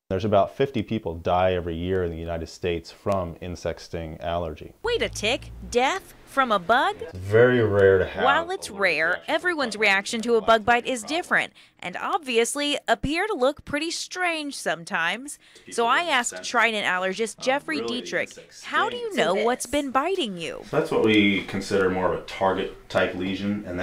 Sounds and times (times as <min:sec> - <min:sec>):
Speech: 0:00.1 - 0:23.8.